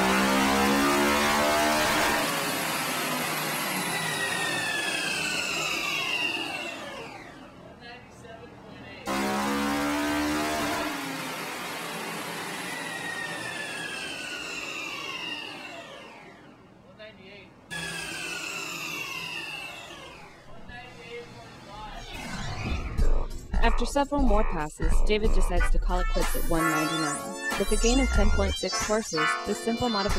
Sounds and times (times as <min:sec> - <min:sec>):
Speech: 0:07.7 - 0:09.1, 0:16.9 - 0:17.5, 0:20.5 - 0:22.0, 0:23.6 - 0:30.1.